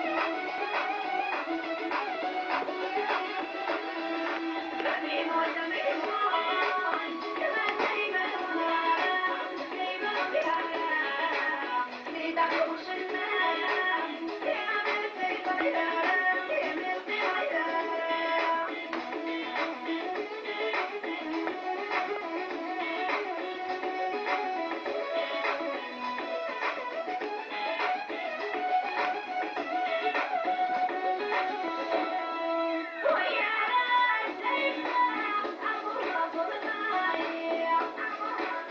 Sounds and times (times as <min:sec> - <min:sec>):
Music: 0:00.0 - 0:38.7.